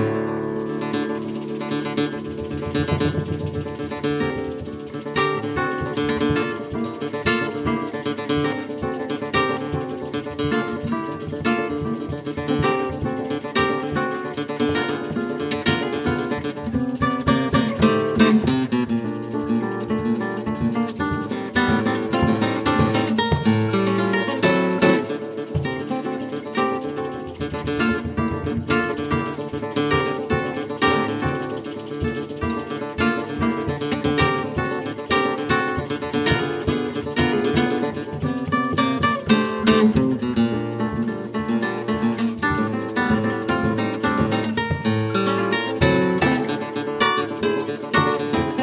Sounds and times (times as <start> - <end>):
Guitar: 0.0 - 48.6.